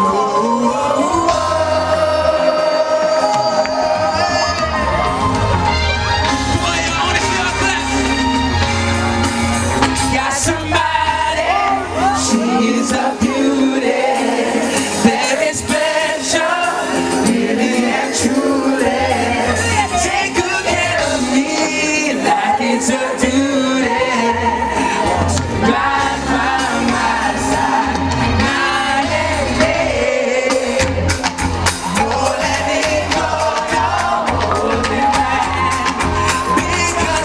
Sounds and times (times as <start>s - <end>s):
Male singing: 0.0s - 4.9s, 10.1s - 14.0s, 15.0s - 27.5s, 31.9s - 37.2s
Music: 0.0s - 37.2s.